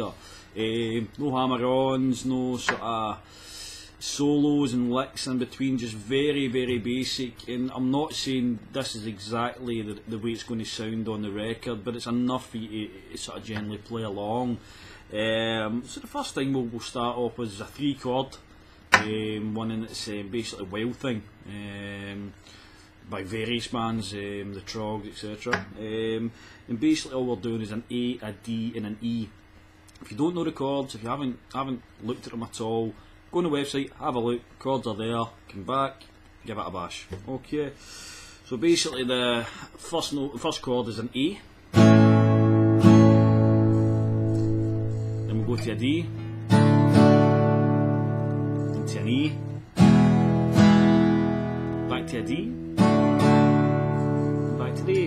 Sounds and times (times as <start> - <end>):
Speech: 0.0 - 3.2, 4.0 - 18.4, 19.0 - 22.4, 23.0 - 29.4, 30.0 - 37.8, 38.4 - 41.5, 45.3 - 46.2, 48.8 - 49.6, 51.9 - 52.6, 54.5 - 55.0.